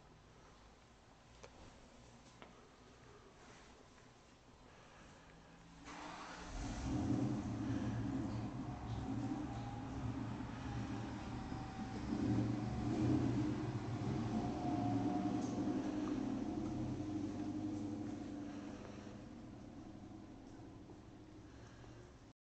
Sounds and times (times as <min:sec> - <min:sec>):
Engine: 0:04.7 - 0:22.4.